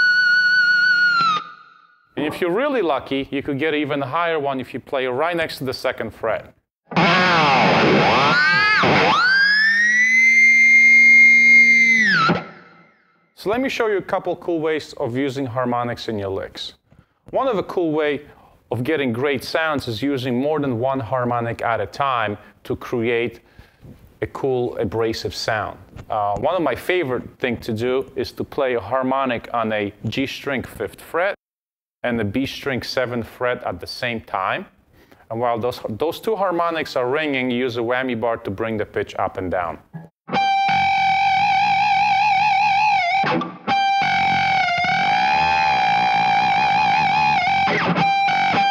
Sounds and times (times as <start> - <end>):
Guitar: 0.0 - 3.1, 6.8 - 13.1, 39.8 - 48.7
Speech: 2.2 - 6.6, 13.4 - 23.4, 24.2 - 31.4, 32.0 - 39.8.